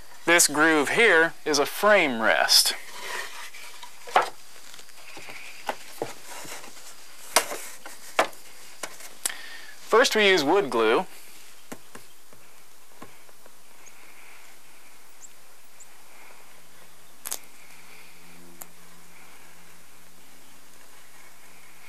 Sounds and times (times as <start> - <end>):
Speech: 0.2 - 2.8, 9.9 - 11.1.